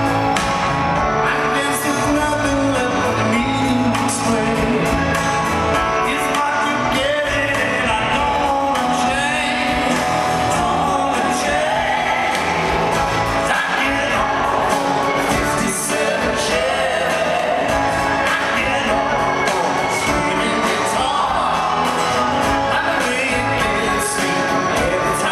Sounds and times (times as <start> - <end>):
Rock and roll: 0.0 - 25.3.